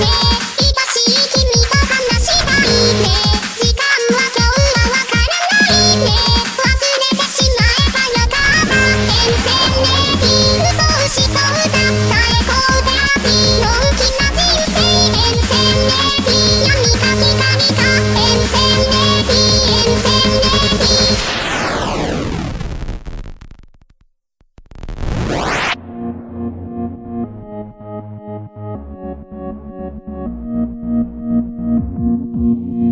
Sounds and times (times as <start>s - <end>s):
Music: 0.0s - 22.6s, 25.2s - 32.9s.